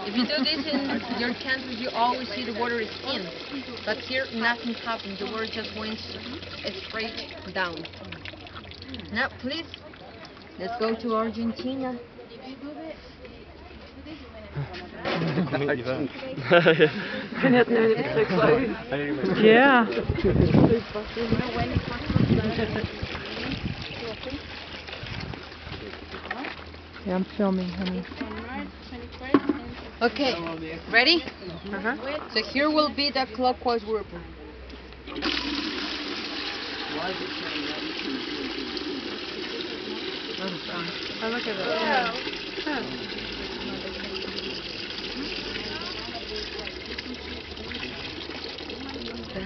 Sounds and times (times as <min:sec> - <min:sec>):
Stream: 0:00.0 - 0:12.9, 0:14.7 - 0:28.6, 0:29.3 - 0:49.4.